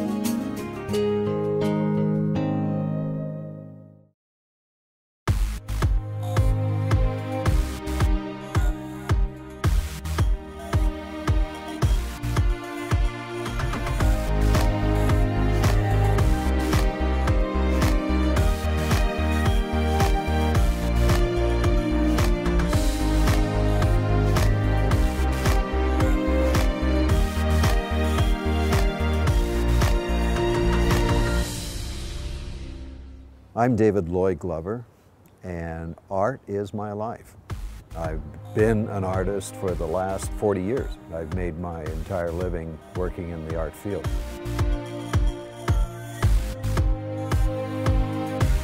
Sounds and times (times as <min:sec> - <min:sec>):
Music: 0:00.0 - 0:04.2, 0:05.3 - 0:33.9, 0:37.5 - 0:48.6
Speech: 0:33.6 - 0:34.8, 0:35.4 - 0:37.3, 0:37.9 - 0:44.1.